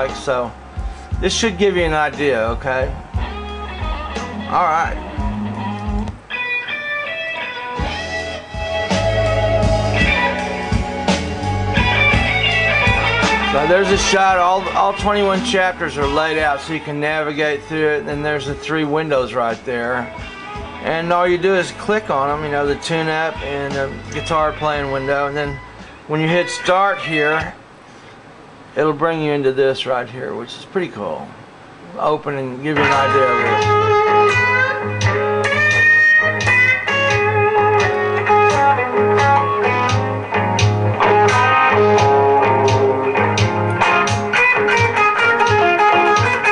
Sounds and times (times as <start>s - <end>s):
Speech: 0.0s - 0.5s, 1.2s - 2.9s, 4.5s - 5.0s, 13.6s - 20.1s, 20.8s - 27.6s, 28.8s - 33.6s
Electric guitar: 0.0s - 27.6s, 32.8s - 46.5s.